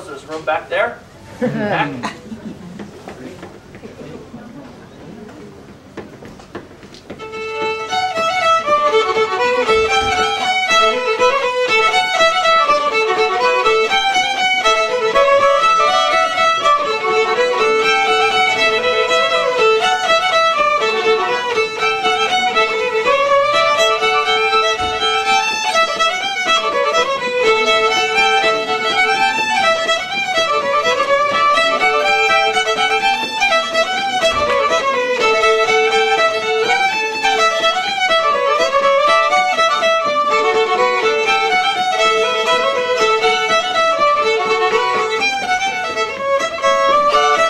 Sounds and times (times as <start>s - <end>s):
Violin, fiddle: 0.0s - 1.1s, 3.1s - 47.5s.